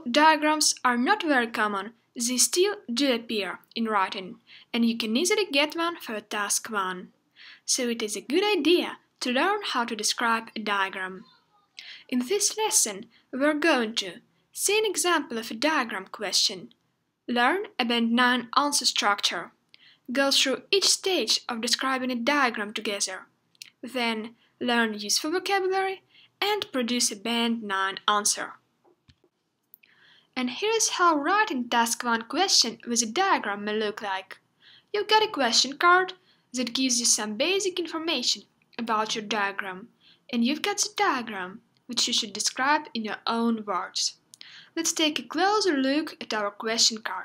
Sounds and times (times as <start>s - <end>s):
Speech: 0.0s - 28.6s, 30.4s - 47.2s.